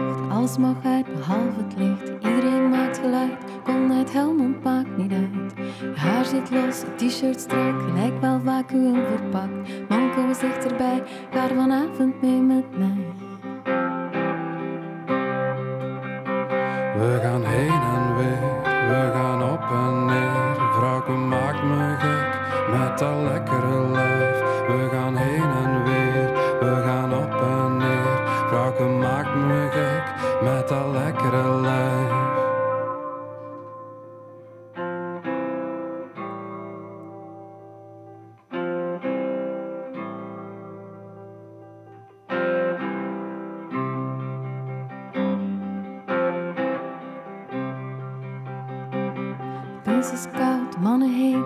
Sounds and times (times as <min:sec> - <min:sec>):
Music: 0:00.0 - 0:51.4.